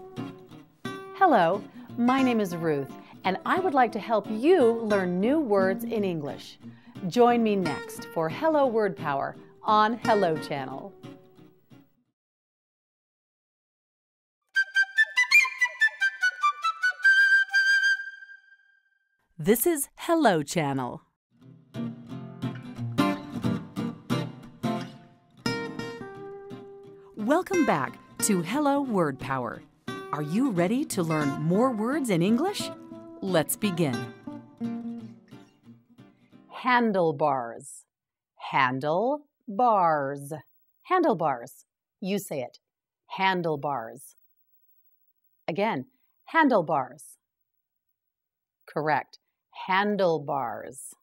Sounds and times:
Music: 0.0s - 12.1s, 14.5s - 19.3s, 21.3s - 37.0s
Speech: 1.2s - 10.9s, 19.4s - 21.0s, 27.2s - 34.1s, 36.6s - 37.8s, 38.4s - 44.1s, 45.5s - 47.2s, 48.7s - 51.0s.

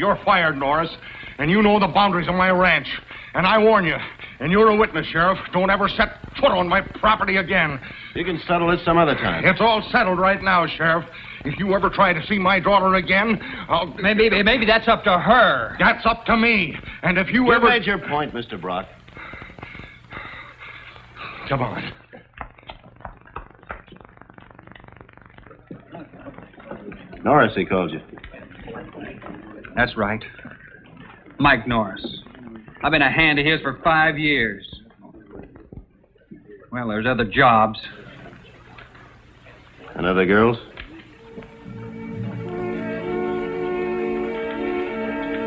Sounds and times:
Speech: 0.0s - 19.0s, 21.4s - 22.0s, 25.8s - 39.0s, 39.7s - 41.1s
Inside, small room: 0.0s - 45.4s.

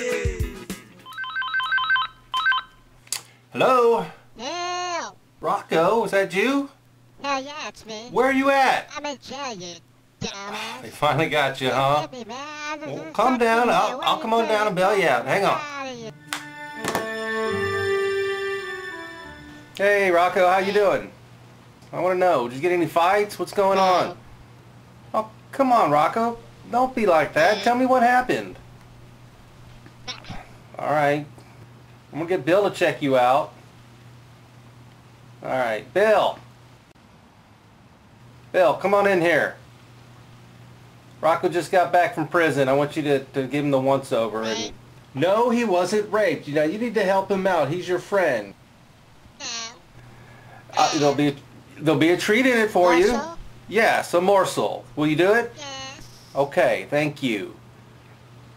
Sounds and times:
Speech: 3.6s - 16.1s, 19.8s - 21.2s, 21.9s - 24.2s, 25.2s - 28.6s, 41.2s - 48.6s, 50.8s - 57.6s.

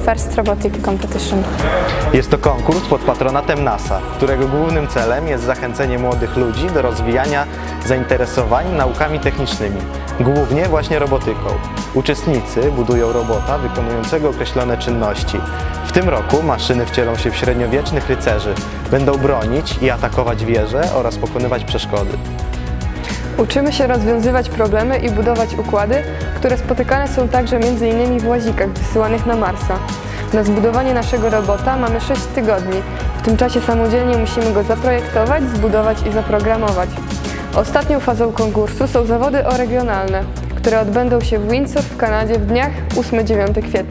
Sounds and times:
Speech: 0.0s - 22.2s, 30.4s - 37.0s, 37.6s - 43.9s
Music: 0.0s - 43.9s.

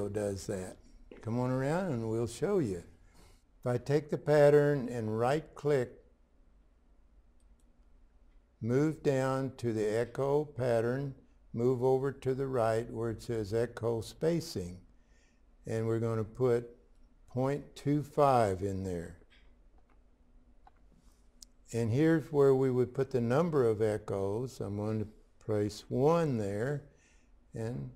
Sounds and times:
Speech: 0.0s - 3.0s, 3.6s - 6.1s, 8.6s - 14.9s, 15.6s - 19.2s, 21.7s - 26.9s, 27.5s - 27.9s.

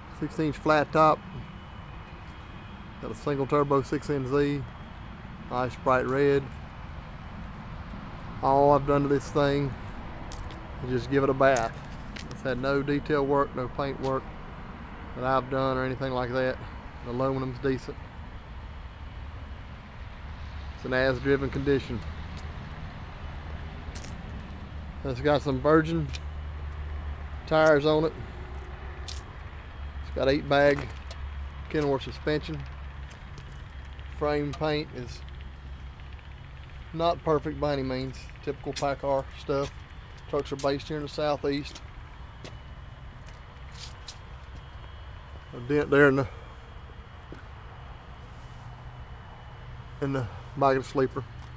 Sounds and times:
Speech: 0.2s - 1.2s, 3.0s - 4.7s, 5.5s - 6.6s, 8.4s - 9.8s, 10.8s - 11.8s, 12.4s - 14.2s, 15.2s - 18.0s, 20.8s - 22.1s, 25.0s - 26.2s, 27.5s - 28.2s, 30.1s - 31.0s, 31.7s - 32.7s, 34.2s - 35.2s, 36.9s - 39.7s, 40.3s - 41.8s, 45.5s - 46.4s, 50.0s - 51.3s.

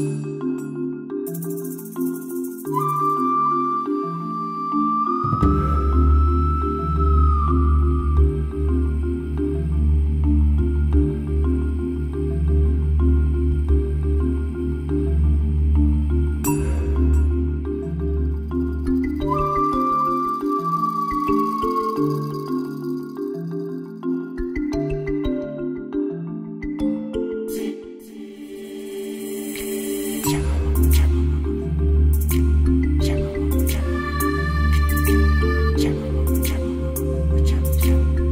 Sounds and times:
Music: 0.0s - 38.3s.

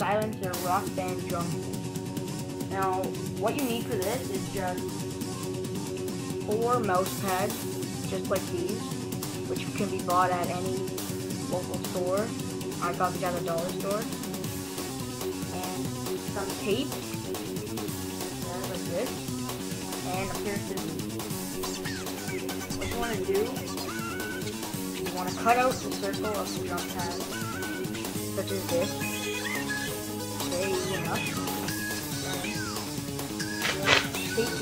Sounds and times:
Speech: 0.0s - 1.5s, 2.7s - 4.8s, 6.5s - 7.5s, 8.1s - 8.8s, 9.5s - 10.8s, 11.5s - 14.1s, 15.5s - 16.9s, 18.4s - 19.2s, 20.0s - 21.0s, 22.8s - 23.6s, 25.1s - 27.2s, 28.4s - 29.1s, 30.5s - 31.4s, 33.6s - 34.6s
Music: 0.0s - 34.6s.

